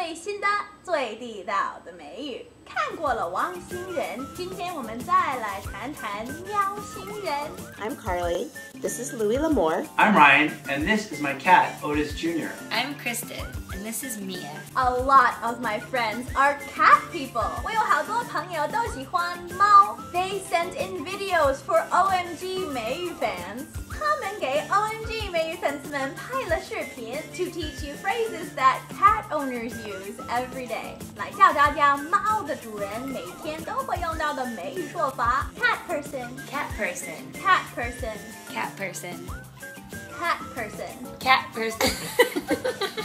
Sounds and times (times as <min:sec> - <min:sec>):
Music: 0:02.2 - 0:43.0.